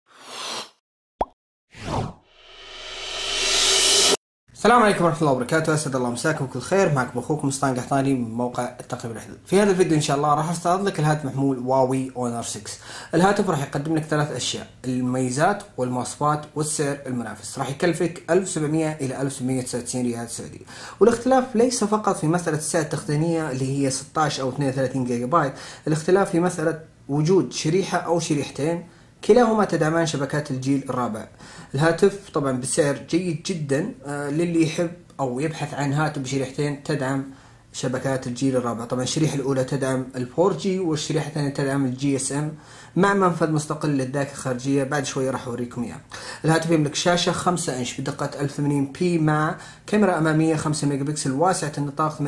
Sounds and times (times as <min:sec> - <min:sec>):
Speech: 0:04.6 - 0:52.2.